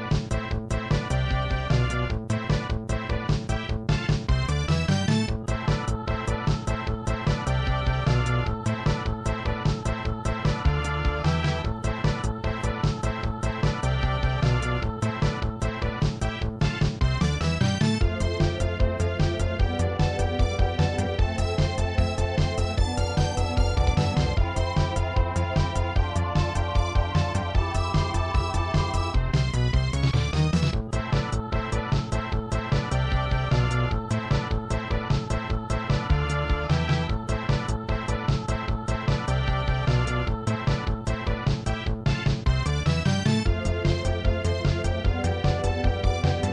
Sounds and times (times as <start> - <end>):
Soundtrack music: 0.0 - 46.5
Video game music: 0.0 - 46.5.